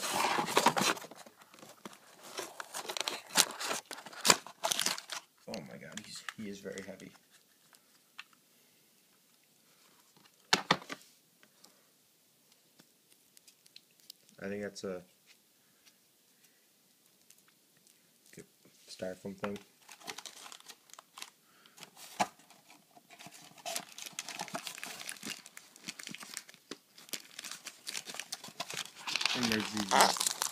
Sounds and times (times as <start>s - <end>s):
Speech: 5.4s - 7.2s, 14.4s - 15.1s, 18.3s - 19.7s, 29.4s - 30.2s.